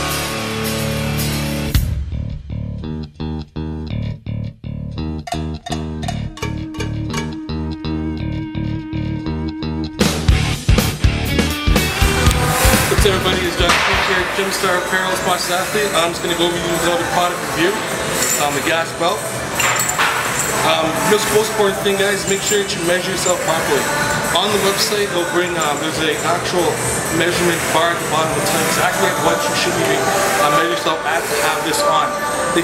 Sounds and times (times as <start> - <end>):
Music: 0.0 - 32.6
Speech: 12.8 - 17.8, 18.4 - 19.2, 20.6 - 32.6.